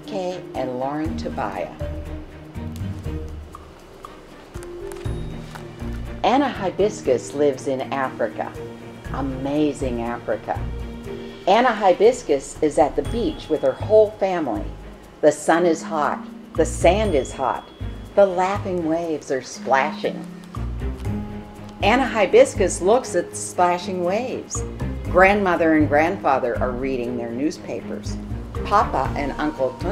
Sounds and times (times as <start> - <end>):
Speech: 0.0 - 1.8, 6.3 - 10.6, 11.5 - 17.6, 18.2 - 20.3, 21.8 - 24.6, 25.2 - 29.9
Music: 0.0 - 29.9.